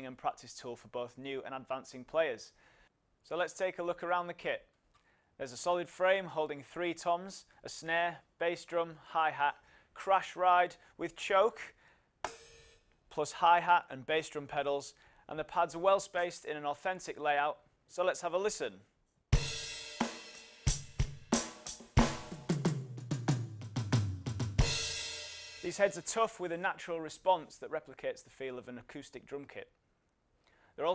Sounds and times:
Speech: 0.0 - 2.6, 3.2 - 4.7, 5.4 - 11.8, 13.1 - 18.9, 25.6 - 29.8.

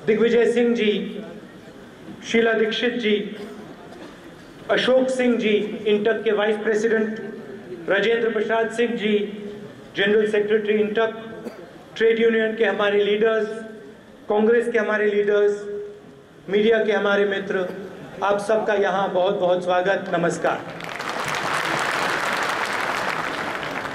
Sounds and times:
Male speech, man speaking: 0.0 - 1.4, 2.2 - 3.5, 4.7 - 11.4, 12.0 - 15.8, 16.5 - 20.8
Narration, monologue: 0.0 - 20.8.

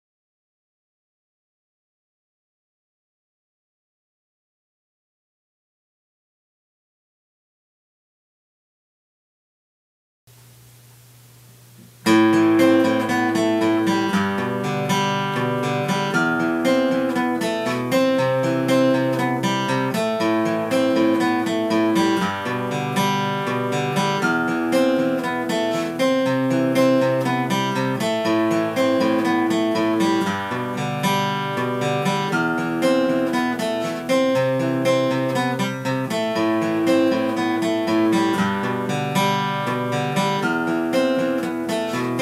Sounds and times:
Acoustic guitar: 10.3 - 42.2
Strum: 11.7 - 42.2.

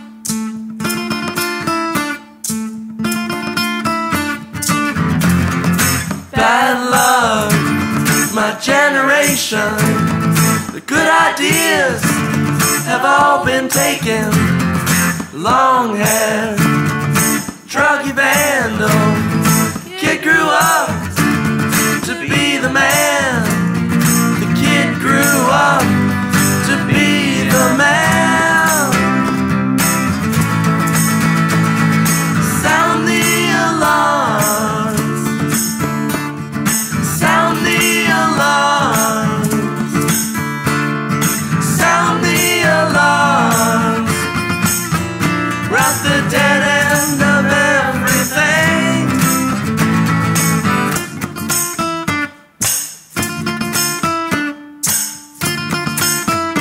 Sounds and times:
Music: 0.0 - 56.6
Rattle: 20.6 - 51.9.

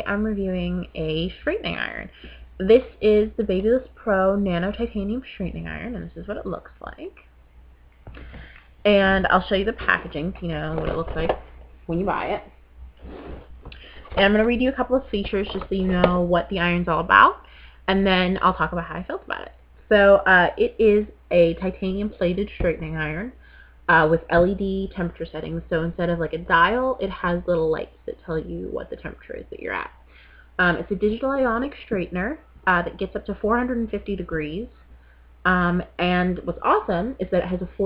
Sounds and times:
Speech: 0.0 - 7.2, 8.8 - 12.5, 14.1 - 30.0, 30.6 - 34.7, 35.5 - 37.8.

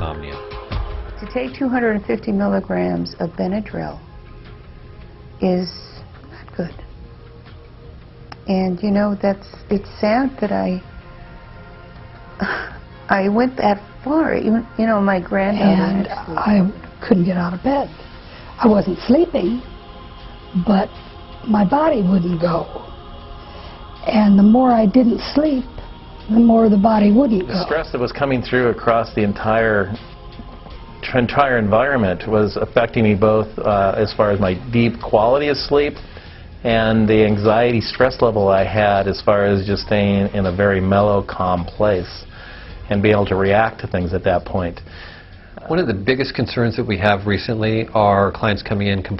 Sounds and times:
Speech: 0.0 - 0.4, 15.4 - 16.7, 26.3 - 30.0
Music: 0.0 - 49.1.

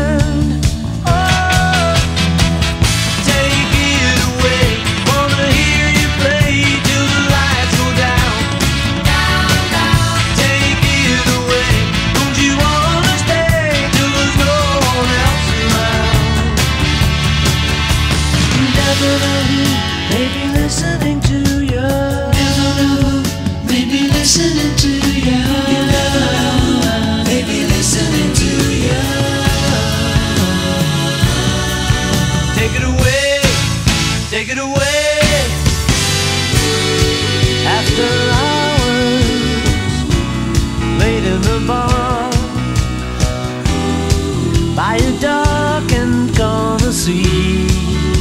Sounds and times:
Singing: 0.0 - 2.2, 3.2 - 16.6, 18.6 - 33.7, 36.5 - 42.6, 44.0 - 48.2
Independent music: 0.0 - 48.2.

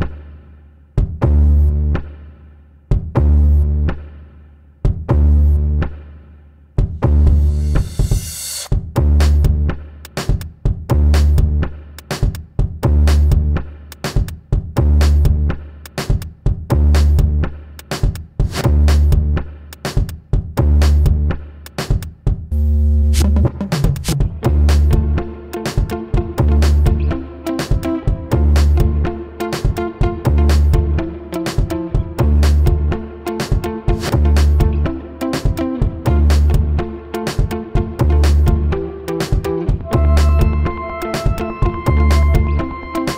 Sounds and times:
Music: 0.0 - 43.1.

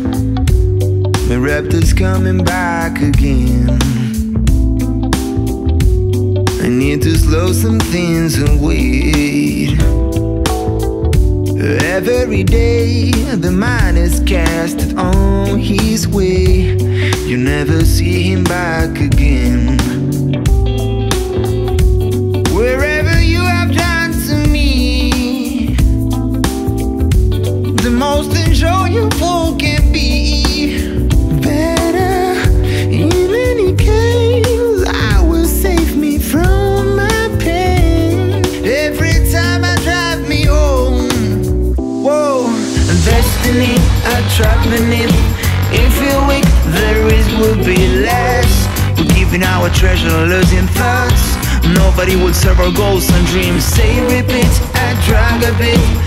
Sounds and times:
Music: 0.0 - 56.0.

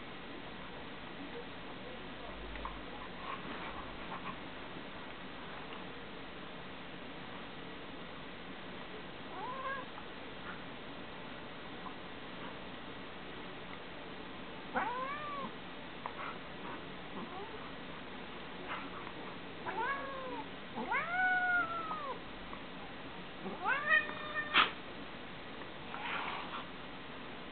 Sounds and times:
Caterwaul: 9.4 - 9.9, 14.8 - 15.5, 19.7 - 22.2, 23.4 - 24.8.

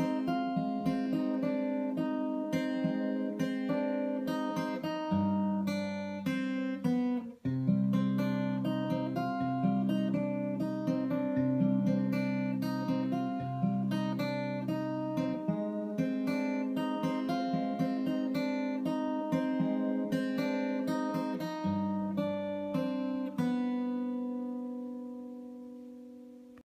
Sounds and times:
Strum: 0.0 - 26.6.

